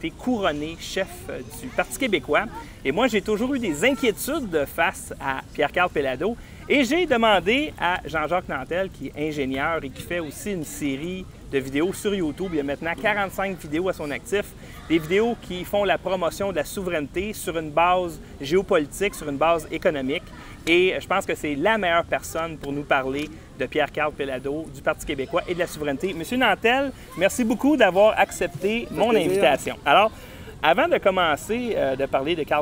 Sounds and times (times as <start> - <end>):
Speech: 0.0 - 32.6.